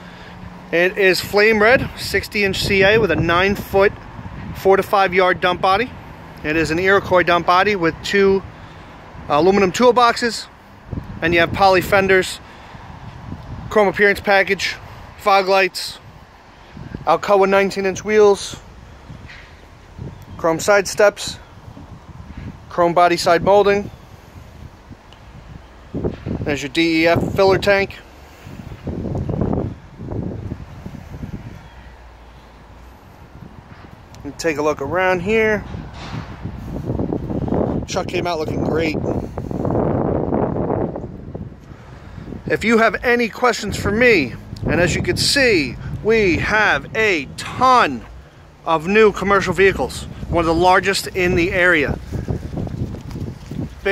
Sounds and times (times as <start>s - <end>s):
Speech: 0.7s - 3.9s, 4.6s - 8.4s, 9.3s - 10.5s, 11.2s - 12.4s, 13.7s - 16.0s, 17.0s - 18.6s, 20.4s - 21.4s, 22.7s - 23.9s, 26.4s - 28.0s, 34.2s - 35.7s, 37.9s - 39.0s, 42.5s - 52.0s.